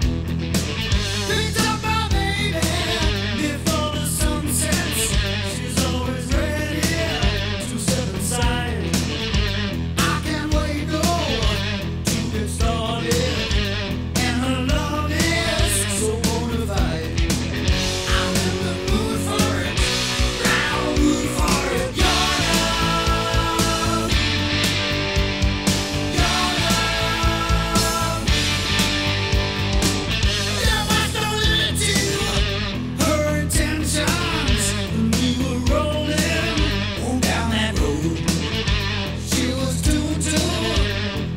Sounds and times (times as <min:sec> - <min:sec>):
Music: 0:00.0 - 0:41.3.